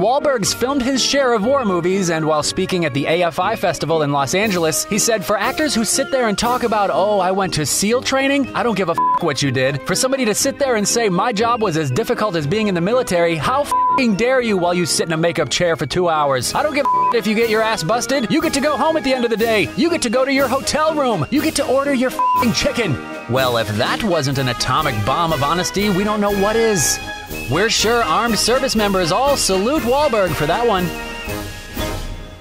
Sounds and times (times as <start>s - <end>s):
Speech: 0.0s - 30.9s
Music: 0.0s - 32.4s.